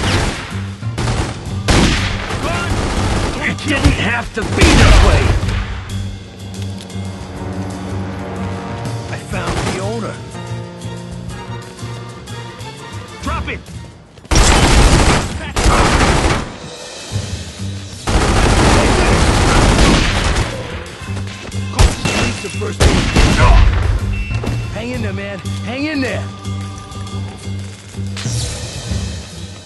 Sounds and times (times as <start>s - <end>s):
Music: 0.0s - 29.6s.